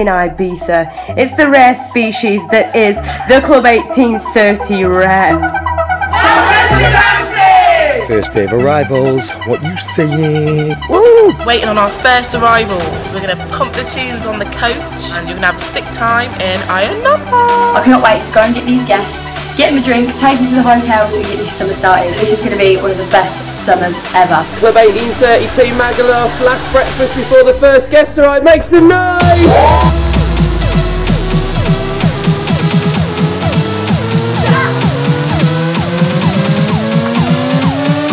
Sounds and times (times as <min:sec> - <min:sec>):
Music: 0:00.0 - 0:38.1
Speech: 0:08.0 - 0:10.8, 0:11.5 - 0:29.9.